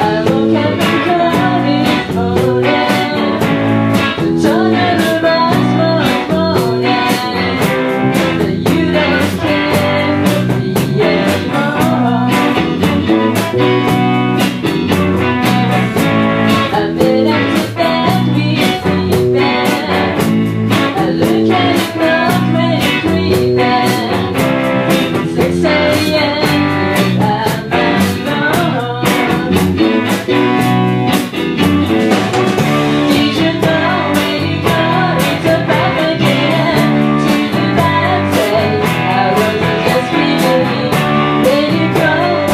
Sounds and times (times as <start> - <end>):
Music: 0.0 - 42.5.